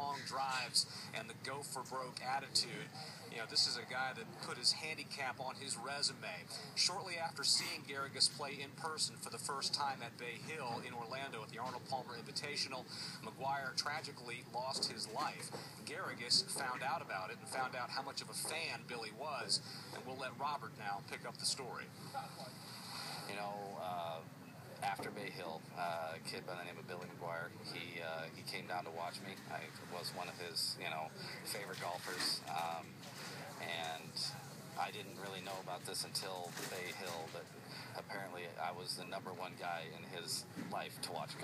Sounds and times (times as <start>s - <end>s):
Speech: 0.0s - 21.9s, 23.3s - 41.4s.